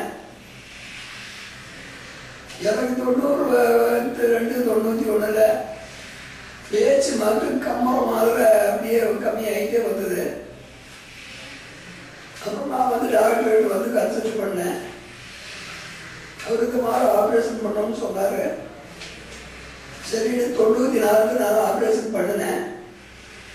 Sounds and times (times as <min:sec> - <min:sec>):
Male speech, man speaking: 0:00.0 - 0:00.2, 0:02.6 - 0:05.8, 0:06.7 - 0:10.5, 0:12.4 - 0:15.0, 0:16.4 - 0:18.6, 0:20.0 - 0:22.8
Narration, monologue: 0:00.0 - 0:23.5.